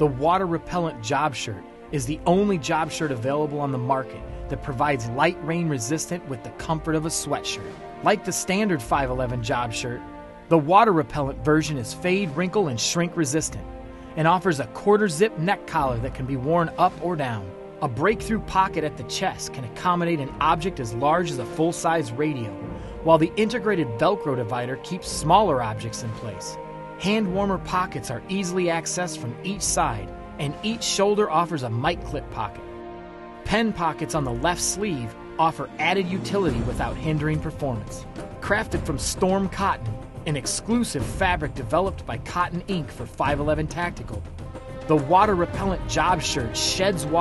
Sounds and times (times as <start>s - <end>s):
Speech: 0.0s - 32.6s, 33.5s - 44.2s, 44.9s - 47.2s
Music: 0.0s - 47.2s.